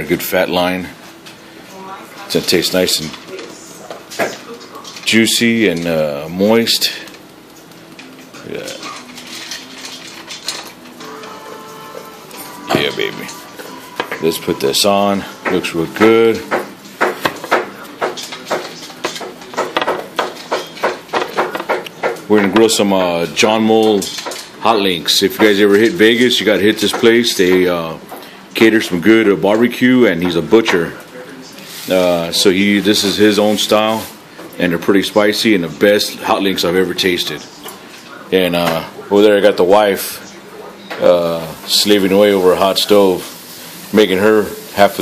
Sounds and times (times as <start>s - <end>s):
Speech: 0.0s - 1.0s, 1.7s - 7.2s, 8.4s - 9.0s, 12.7s - 13.4s, 14.2s - 16.6s, 22.3s - 28.0s, 28.6s - 45.0s
Music: 7.9s - 22.3s.